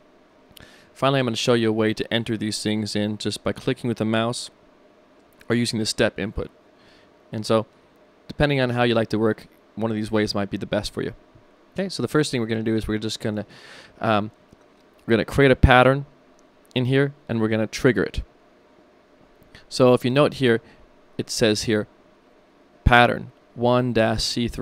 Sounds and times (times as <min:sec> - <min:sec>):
Speech: 0:01.0 - 0:04.6, 0:05.5 - 0:06.5, 0:07.3 - 0:07.7, 0:08.3 - 0:11.2, 0:11.8 - 0:14.4, 0:15.1 - 0:16.1, 0:16.8 - 0:18.3, 0:19.7 - 0:20.6, 0:21.2 - 0:21.9, 0:22.8 - 0:24.6.